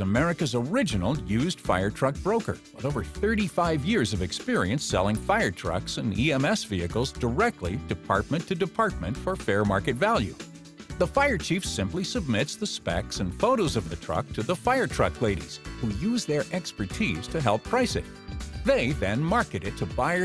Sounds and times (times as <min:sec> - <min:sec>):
Speech: 0:00.0 - 0:10.4, 0:11.0 - 0:20.2
Music: 0:00.0 - 0:20.2.